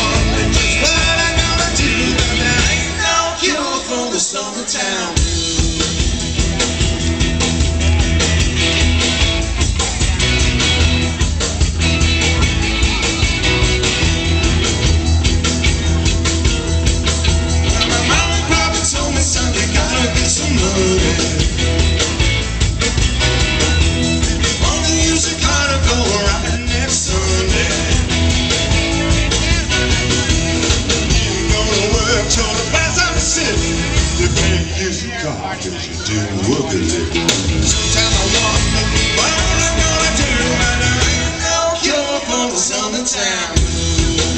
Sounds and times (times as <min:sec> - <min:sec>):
Rock and roll: 0:00.0 - 0:44.3.